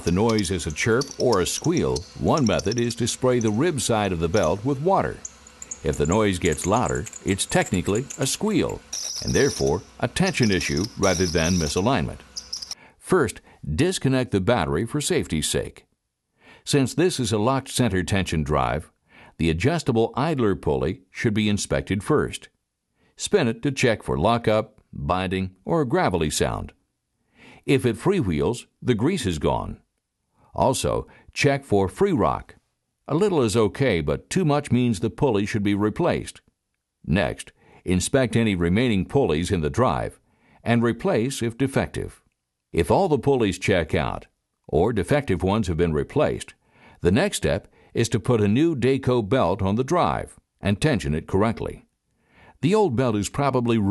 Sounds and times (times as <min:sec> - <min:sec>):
Narration, monologue: 0:00.0 - 0:53.9.